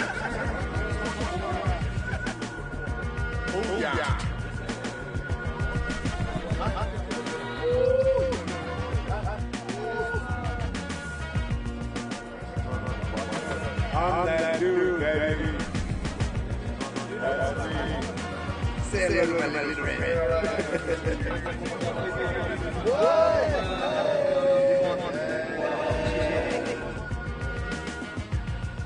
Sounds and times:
Music: 0.0 - 28.8.

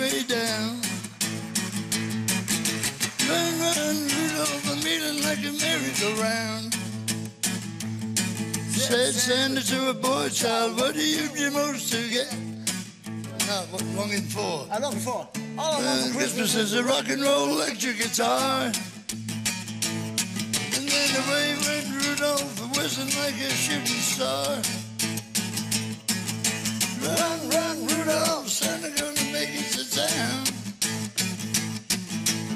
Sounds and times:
Music: 0.0 - 32.5.

